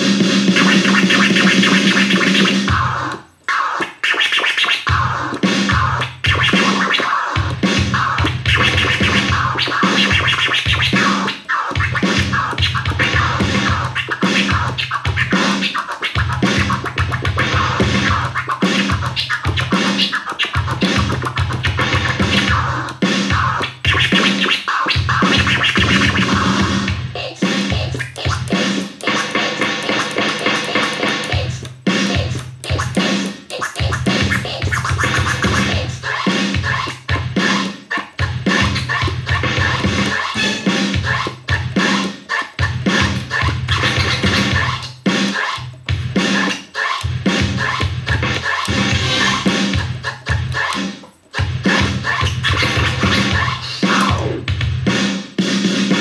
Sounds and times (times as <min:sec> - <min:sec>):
House music: 0:00.0 - 0:56.0
Scratching (performance technique): 0:00.0 - 0:56.0
Scratch: 0:00.6 - 0:07.4, 0:08.0 - 0:26.6, 0:27.2 - 0:53.6.